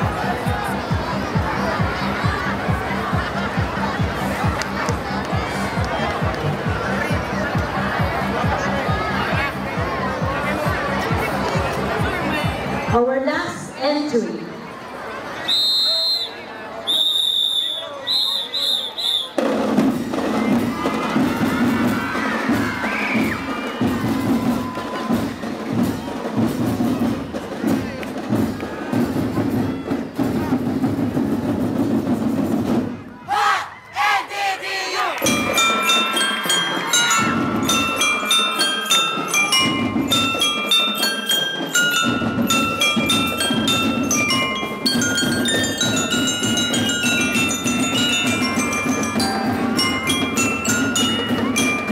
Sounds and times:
Music: 0:00.0 - 0:14.2, 0:19.0 - 0:33.1, 0:35.2 - 0:51.9.

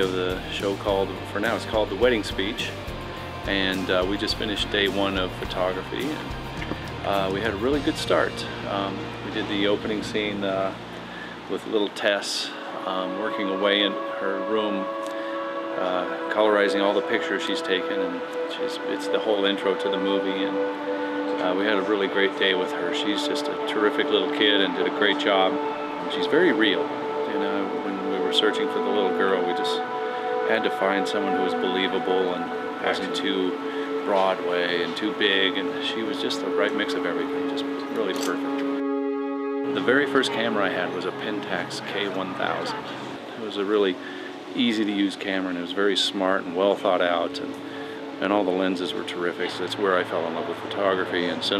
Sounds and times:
Male speech, man speaking: 0:00.0 - 0:02.8, 0:03.4 - 0:06.2, 0:07.0 - 0:10.8, 0:11.5 - 0:14.9, 0:15.8 - 0:20.6, 0:21.4 - 0:29.8, 0:30.4 - 0:38.4, 0:39.8 - 0:47.6, 0:48.2 - 0:51.5
Music: 0:00.0 - 0:51.5
Narration, monologue: 0:00.0 - 0:51.5.

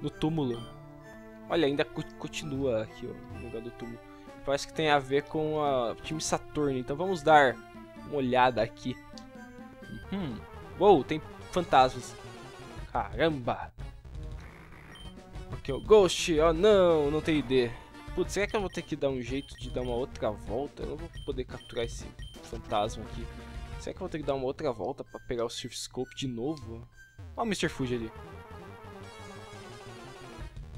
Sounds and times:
Speech: 0:00.0 - 0:00.7, 0:01.5 - 0:09.0, 0:10.0 - 0:12.2, 0:12.9 - 0:13.7, 0:15.6 - 0:28.2
Music: 0:00.0 - 0:30.7.

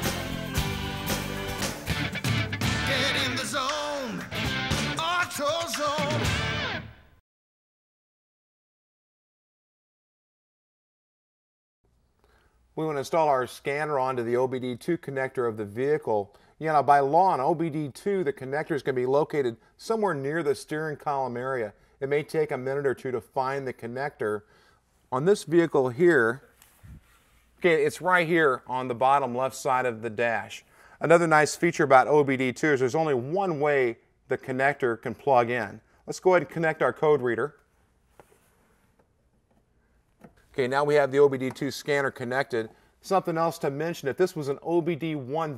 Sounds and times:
Speech: 0:12.8 - 0:24.5, 0:25.1 - 0:26.5, 0:27.6 - 0:37.6, 0:40.5 - 0:45.5.

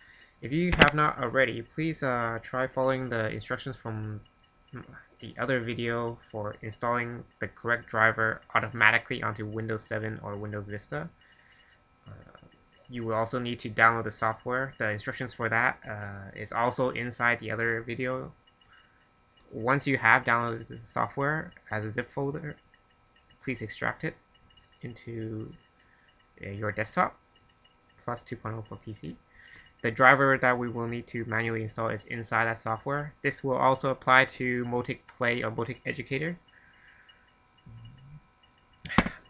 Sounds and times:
Speech: 0:00.4 - 0:04.2, 0:04.8 - 0:11.2, 0:12.1 - 0:18.4, 0:19.5 - 0:22.6, 0:23.4 - 0:24.2, 0:24.8 - 0:25.6, 0:26.4 - 0:27.2, 0:28.0 - 0:29.2, 0:29.8 - 0:36.4.

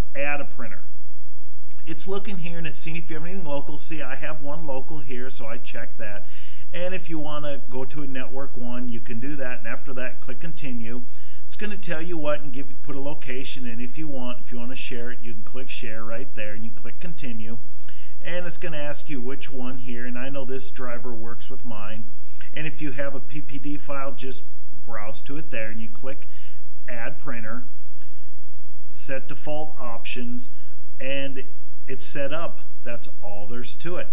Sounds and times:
Speech: 0:00.1 - 0:00.9, 0:01.8 - 0:17.6, 0:18.2 - 0:26.3, 0:26.9 - 0:27.7, 0:29.0 - 0:34.1.

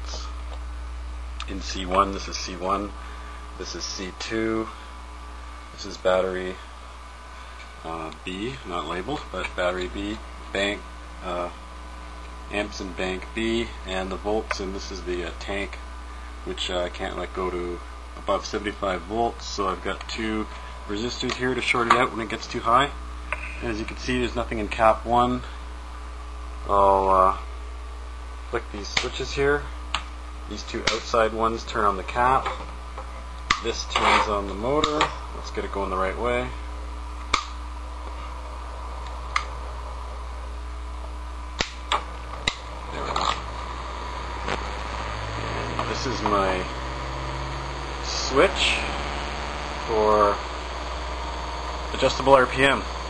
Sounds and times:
Speech: 0:00.0 - 0:00.3, 0:01.4 - 0:03.0, 0:03.6 - 0:04.8, 0:05.8 - 0:06.6, 0:07.8 - 0:11.6, 0:12.5 - 0:15.8, 0:16.4 - 0:25.6, 0:26.6 - 0:27.4, 0:28.5 - 0:29.8, 0:30.5 - 0:32.6, 0:33.6 - 0:36.6, 0:42.9 - 0:43.5, 0:45.6 - 0:46.8, 0:48.0 - 0:49.0, 0:49.8 - 0:50.5, 0:51.9 - 0:53.0.

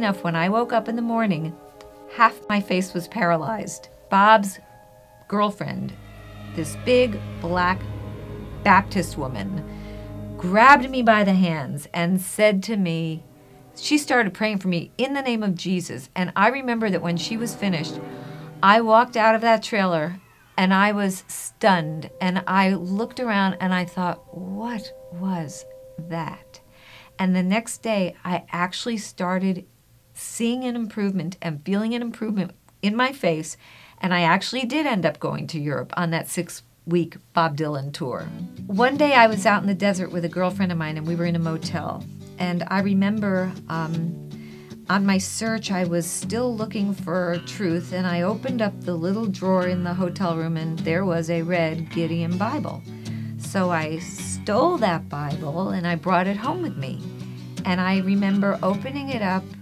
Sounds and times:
Female speech, woman speaking: 0:00.0 - 0:04.6, 0:05.3 - 0:06.0, 0:06.6 - 0:07.9, 0:08.7 - 0:09.6, 0:10.4 - 0:13.2, 0:13.8 - 0:18.0, 0:18.6 - 0:26.6, 0:27.2 - 0:44.2, 0:44.9 - 0:52.8, 0:53.4 - 0:57.0, 0:57.6 - 0:59.6
Music: 0:00.0 - 0:28.5, 0:38.2 - 0:59.6.

